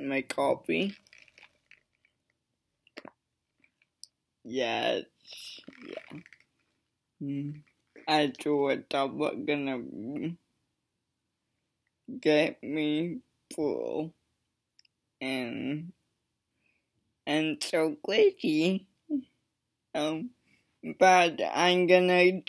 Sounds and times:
Speech: 0.0 - 1.0, 4.5 - 6.2, 7.2 - 10.4, 12.1 - 14.1, 15.2 - 15.9, 17.3 - 19.2, 20.0 - 22.4.

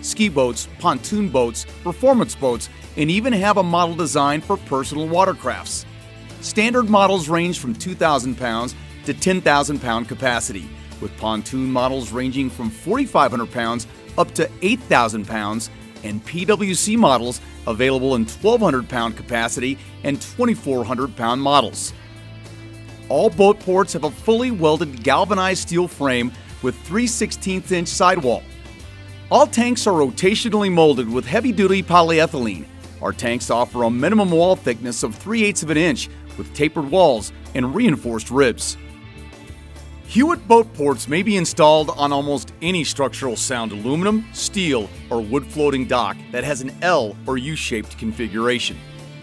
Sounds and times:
Speech: 0.0 - 5.8, 6.4 - 21.9, 23.1 - 28.4, 29.3 - 38.8, 40.1 - 48.8
Music: 0.0 - 49.2.

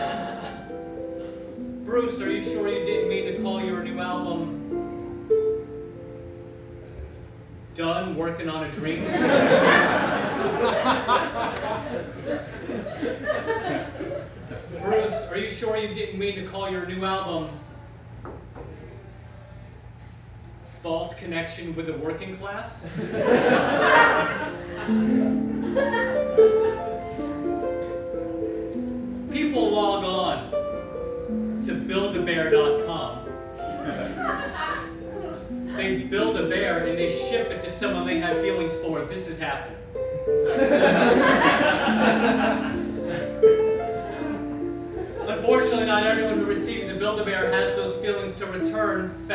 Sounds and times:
Speech: 14.8 - 17.6, 20.8 - 22.8, 45.3 - 49.3.

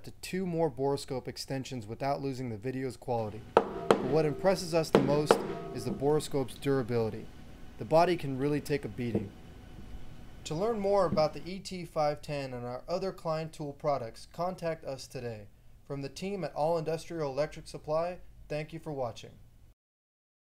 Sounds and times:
Speech: 0.0 - 3.4, 4.0 - 9.3, 10.5 - 19.4.

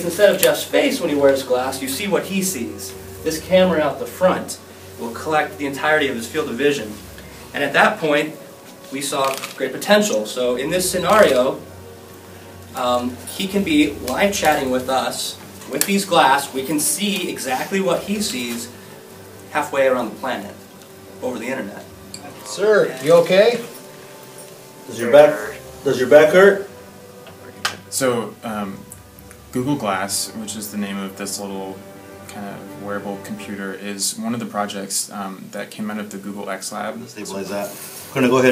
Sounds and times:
Speech: 0.0 - 7.0, 7.6 - 11.6, 12.8 - 18.7, 19.5 - 20.6, 21.2 - 23.7, 24.9 - 26.7, 27.9 - 28.9, 29.5 - 38.5
Music: 0.0 - 38.5.

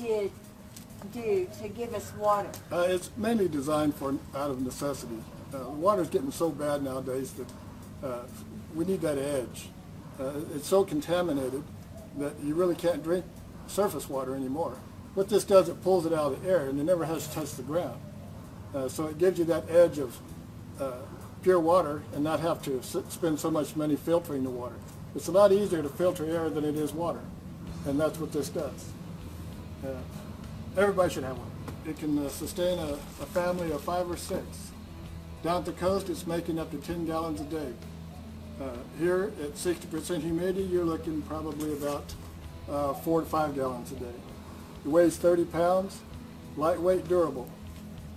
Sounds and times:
Speech: 1.0 - 18.0, 20.8 - 27.3, 30.8 - 34.7, 35.4 - 37.8, 38.6 - 44.3, 44.9 - 46.0, 46.6 - 47.5.

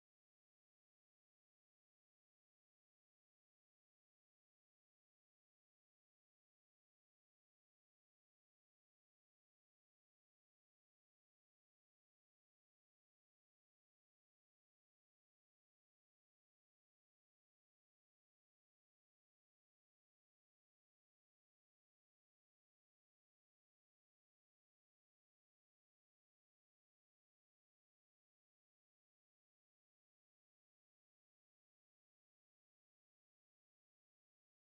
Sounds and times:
Silence: 0.0 - 34.6.

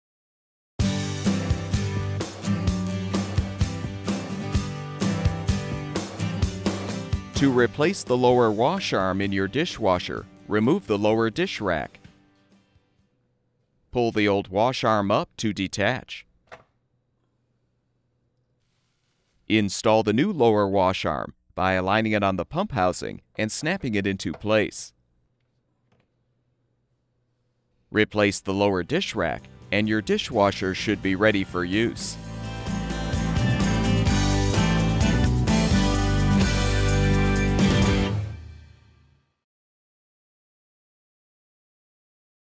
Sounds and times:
Music: 0.8 - 13.3, 28.3 - 39.5
Speech: 7.4 - 12.1, 13.9 - 16.3, 19.5 - 25.0, 27.9 - 32.2.

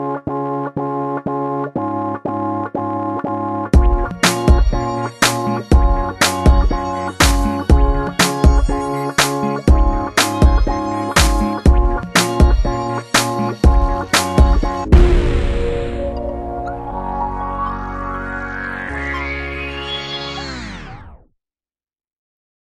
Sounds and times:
Music: 0.0 - 21.3.

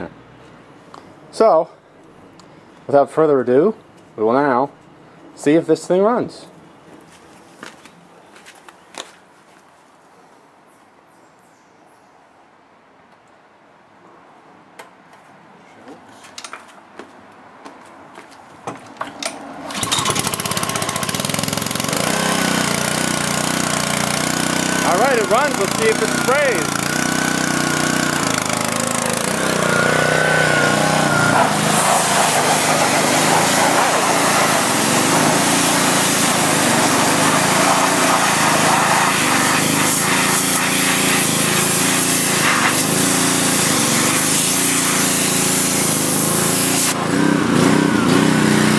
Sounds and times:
Speech: 1.3 - 1.8, 2.9 - 4.8, 5.4 - 6.6, 24.8 - 26.7
Lawn mower: 19.4 - 48.7.

